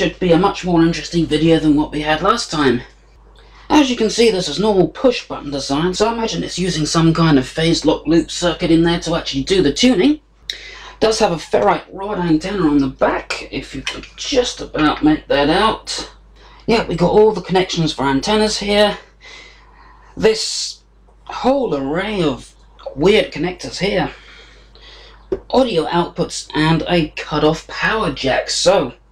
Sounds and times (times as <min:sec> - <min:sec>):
Speech: 0:00.0 - 0:02.9, 0:03.7 - 0:19.1, 0:20.2 - 0:24.3, 0:25.3 - 0:29.0.